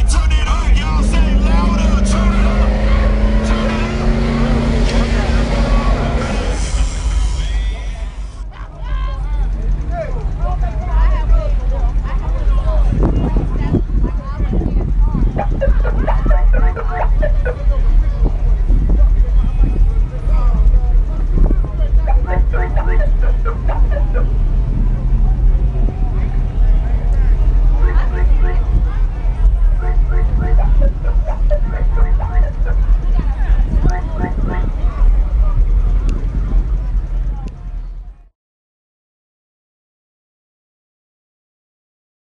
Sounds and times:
Car: 0.0 - 38.3
Speech: 7.4 - 24.3.

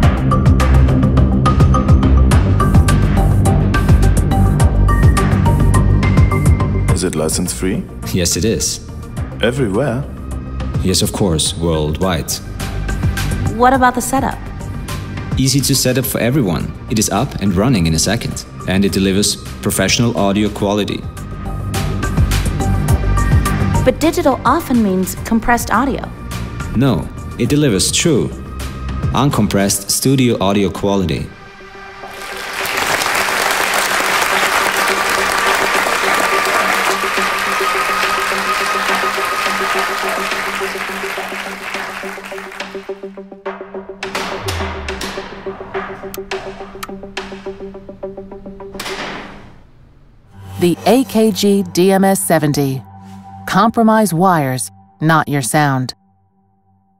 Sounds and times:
Applause: 32.1 - 43.1.

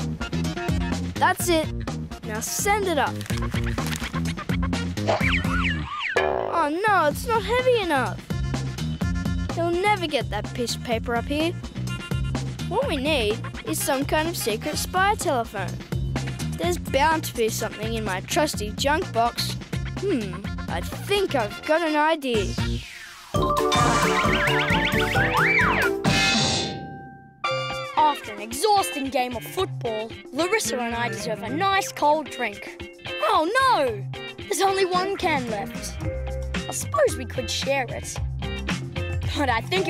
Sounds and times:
Music: 0.0 - 5.9, 6.6 - 39.9
Outside, urban or manmade: 0.0 - 26.5
Speech: 1.2 - 1.7, 2.3 - 3.2, 6.5 - 8.2, 9.6 - 11.6, 12.7 - 15.8, 16.6 - 22.6, 27.9 - 36.0, 36.7 - 38.2, 39.2 - 39.9.

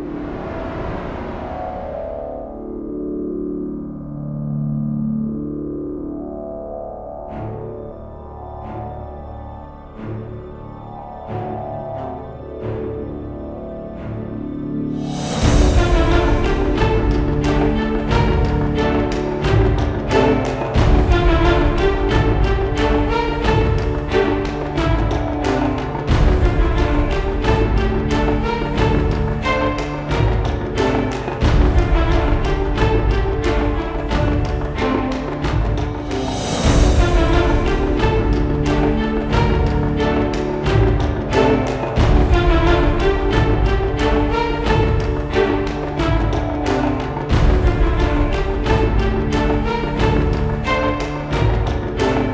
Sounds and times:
Theme music: 0.0 - 52.3.

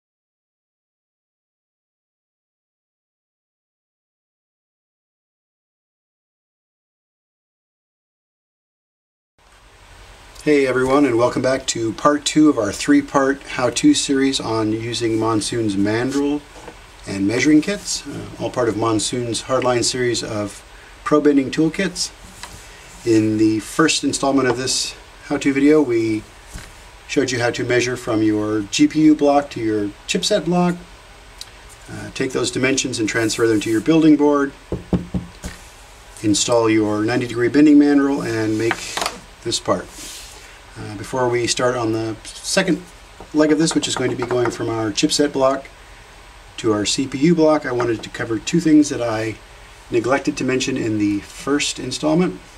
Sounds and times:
Speech: 10.4 - 22.2, 23.0 - 26.3, 27.1 - 30.9, 31.9 - 34.6, 36.2 - 40.0, 40.8 - 45.7, 46.6 - 52.5.

